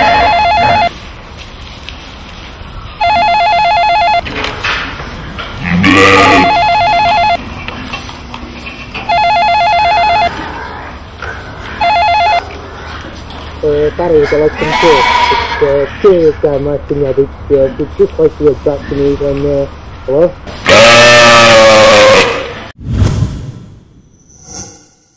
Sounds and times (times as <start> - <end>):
Bleat: 5.6 - 6.6, 14.2 - 15.9
Speech: 13.6 - 20.4.